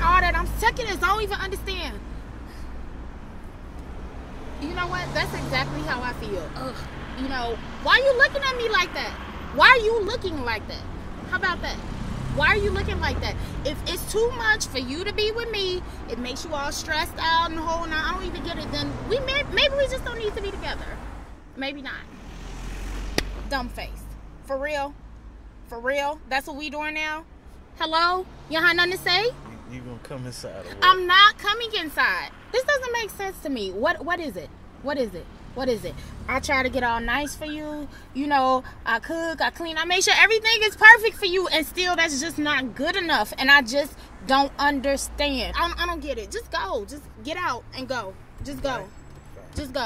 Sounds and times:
Speech: 27.8s - 49.8s.

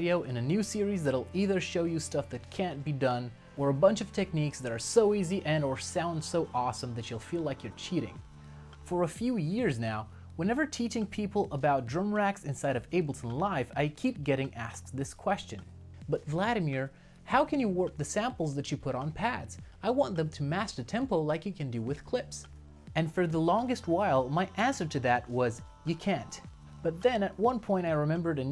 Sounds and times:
Speech: 0.0s - 8.2s, 8.8s - 28.5s.

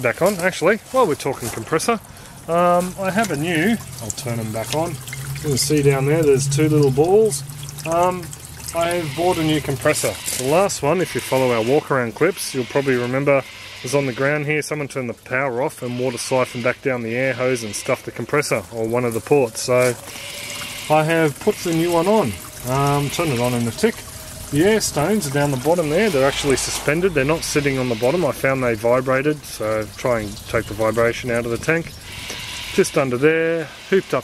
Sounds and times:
Speech: 0.0s - 20.0s, 20.9s - 24.0s, 24.6s - 32.0s, 32.8s - 34.2s.

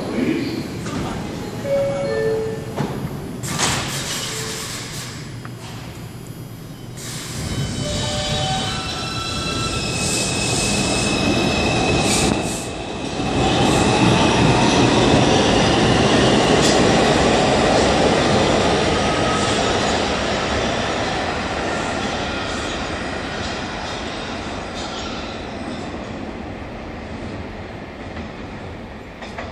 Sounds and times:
Railroad car, train wagon: 0.0s - 29.5s
Subway, metro, underground: 0.0s - 29.5s
Train: 0.0s - 29.5s.

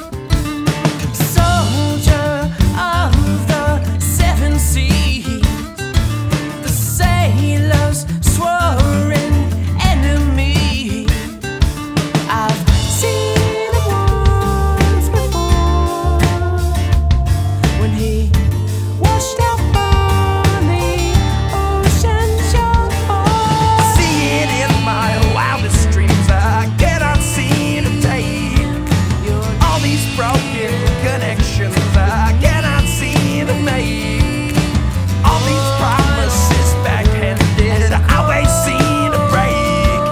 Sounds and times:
Bass guitar: 0.0s - 40.1s.

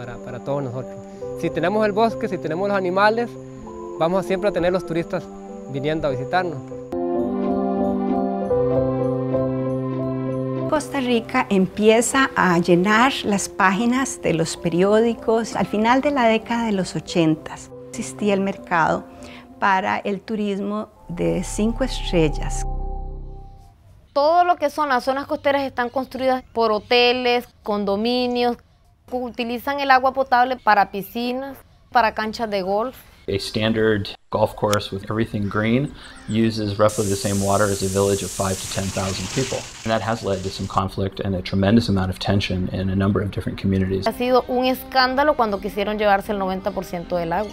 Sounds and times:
Music: 0.0s - 23.8s, 35.0s - 47.5s.

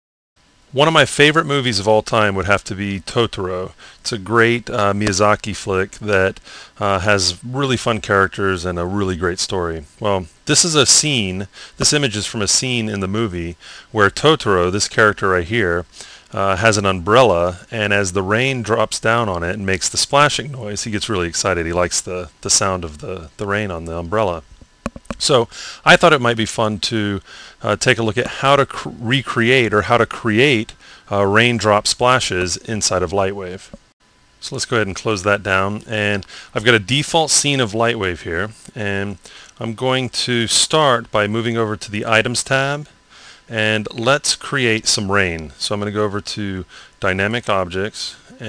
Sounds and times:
Speech: 0.8s - 24.5s, 25.2s - 33.7s, 34.4s - 42.9s, 43.5s - 48.4s.

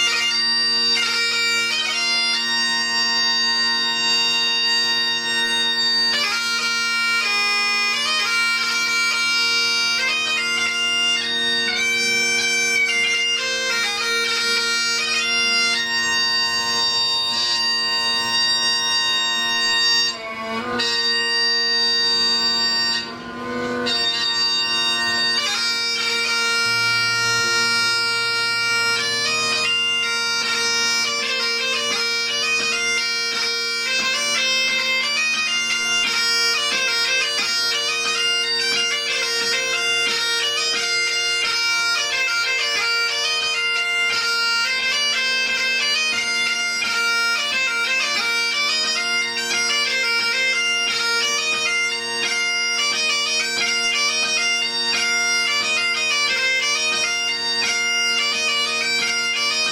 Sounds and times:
Bagpipes: 0.0s - 59.7s.

